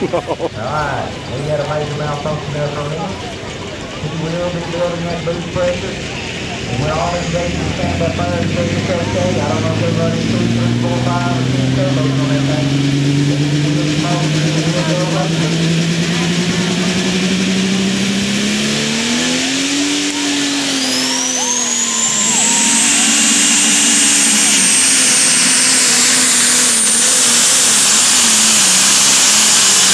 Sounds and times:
Speech: 0:00.0 - 0:17.9
Truck: 0:00.0 - 0:29.9.

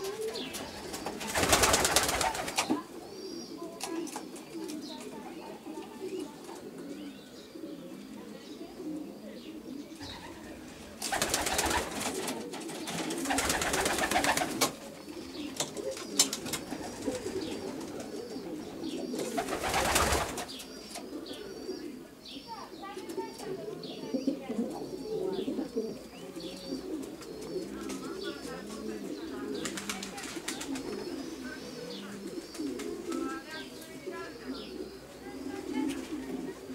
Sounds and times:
Speech: 0:00.0 - 0:11.8, 0:21.4 - 0:36.7
Coo: 0:00.0 - 0:36.7.

